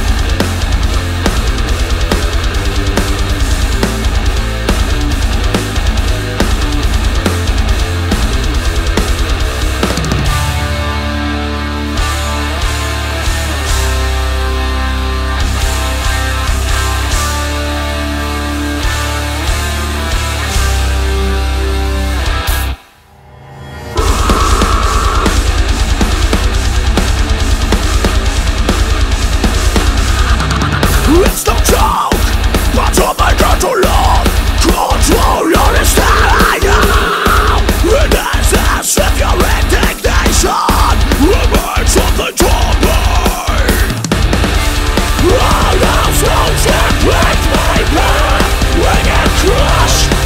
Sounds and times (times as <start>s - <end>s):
Music: 0.0s - 50.2s.